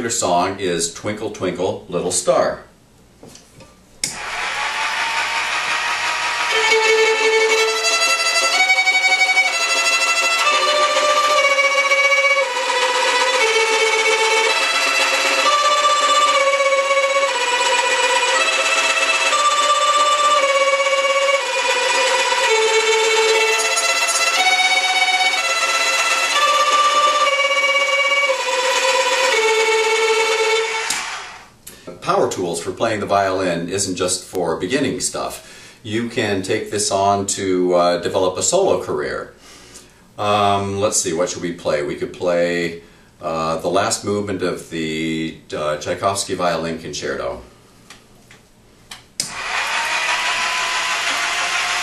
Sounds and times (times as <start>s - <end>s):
Violin, fiddle: 4.1s - 31.4s.